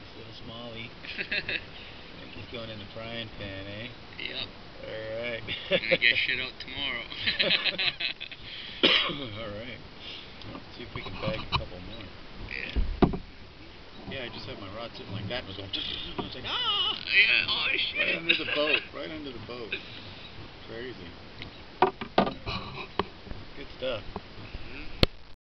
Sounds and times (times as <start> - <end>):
Rowboat, canoe, kayak: 0.0 - 25.2.